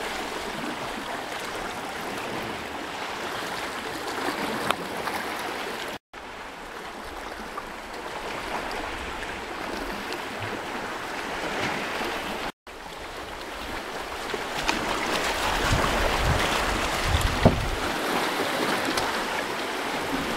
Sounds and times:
Waves, surf: 0:00.0 - 0:20.3.

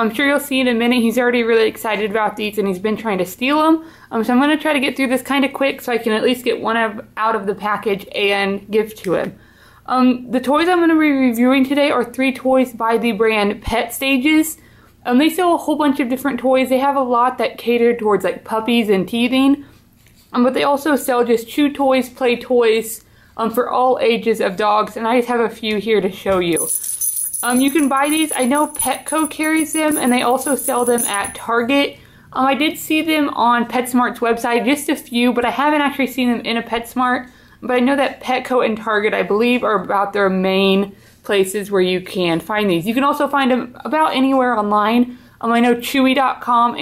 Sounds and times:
Speech: 0:00.0 - 0:19.7, 0:20.3 - 0:26.7, 0:27.4 - 0:46.8.

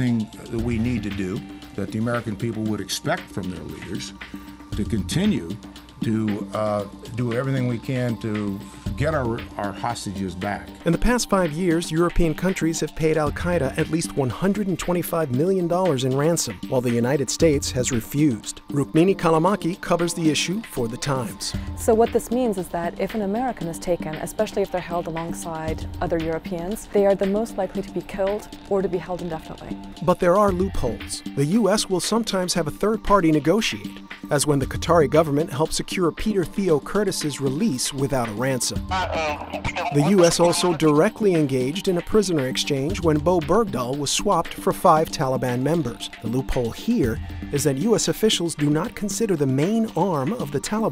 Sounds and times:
Speech: 0:00.0 - 0:04.1, 0:04.8 - 0:23.6, 0:24.5 - 0:50.9
Music: 0:00.0 - 0:50.9.

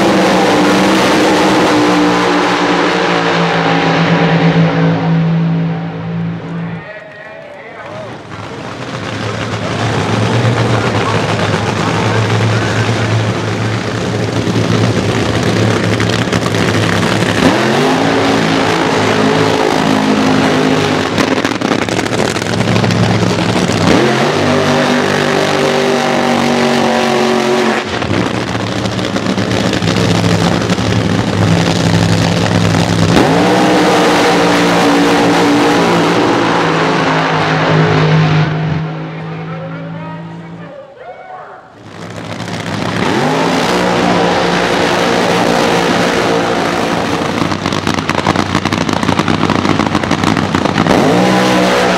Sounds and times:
Car: 0:00.0 - 0:51.9.

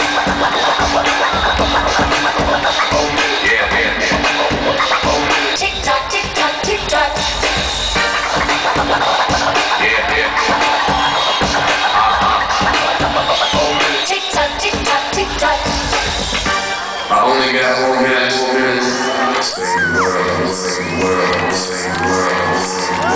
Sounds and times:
Music: 0:00.0 - 0:23.1
Speech: 0:17.1 - 0:19.0.

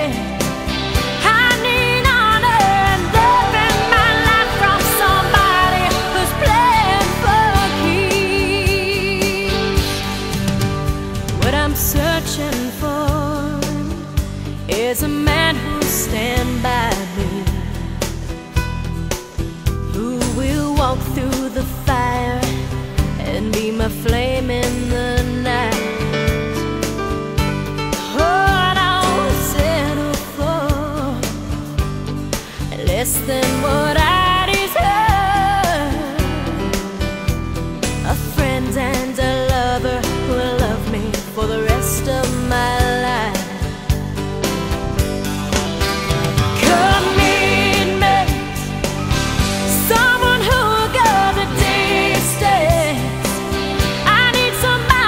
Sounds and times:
Music: 0:00.0 - 0:55.0.

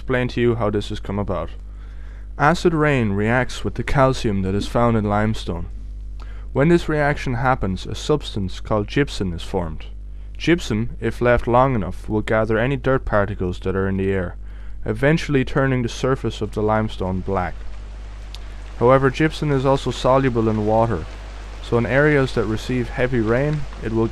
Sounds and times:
Speech: 0:00.0 - 0:01.6, 0:02.4 - 0:05.7, 0:06.6 - 0:17.6, 0:18.8 - 0:24.1.

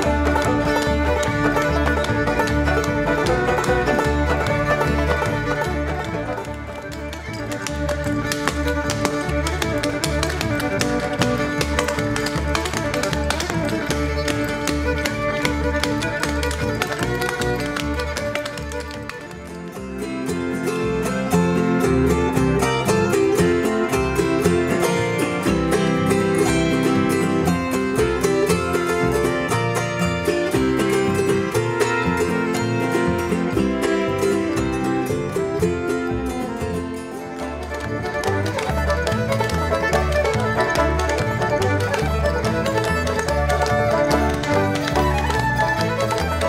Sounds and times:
Bluegrass: 0:00.0 - 0:46.4.

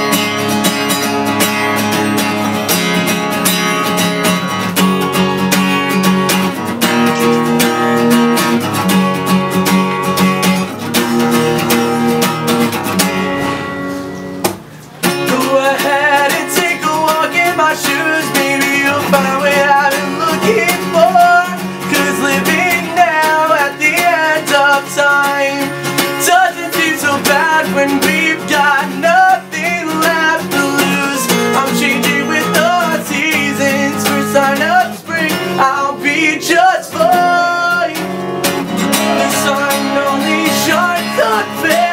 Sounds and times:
Music: 0:00.0 - 0:41.9.

